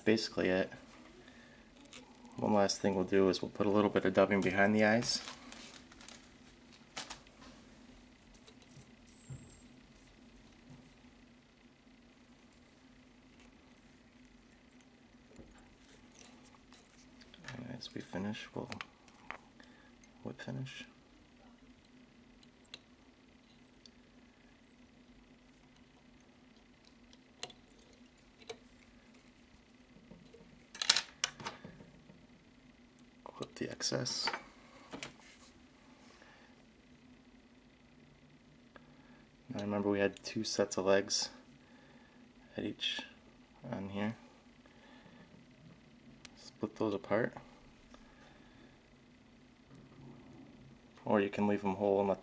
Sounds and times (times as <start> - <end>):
Speech: 0.0 - 0.8, 2.4 - 5.3, 17.5 - 18.8, 20.2 - 21.0, 33.3 - 34.4, 39.5 - 41.4, 42.5 - 44.2, 46.4 - 47.4, 51.0 - 52.2.